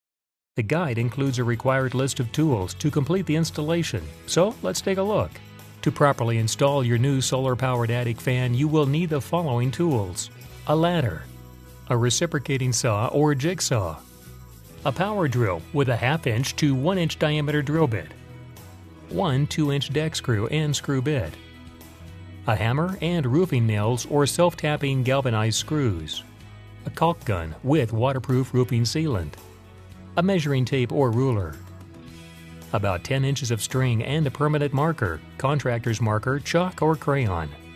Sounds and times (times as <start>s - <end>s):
Speech: 0.6s - 11.3s, 11.9s - 14.0s, 14.8s - 18.2s, 19.1s - 21.4s, 22.5s - 29.4s, 30.2s - 31.6s, 32.7s - 37.6s
Music: 0.6s - 37.7s.